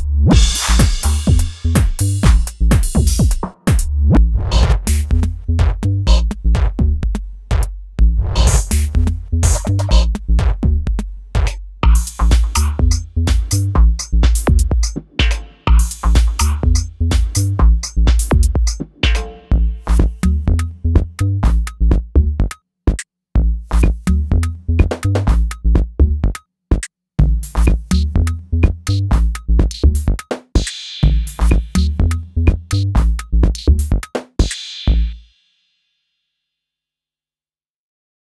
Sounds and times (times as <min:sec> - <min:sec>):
Drum kit: 0:00.0 - 0:22.1, 0:23.7 - 0:25.9, 0:27.2 - 0:35.2.